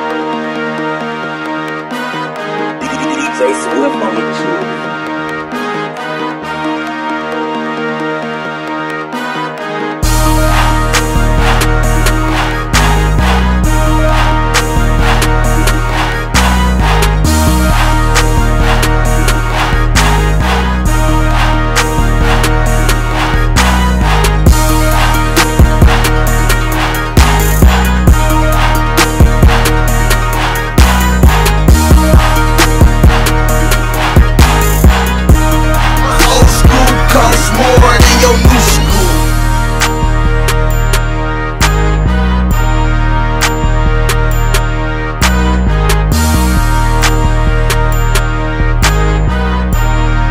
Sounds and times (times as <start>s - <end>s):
Music: 0.0s - 50.3s.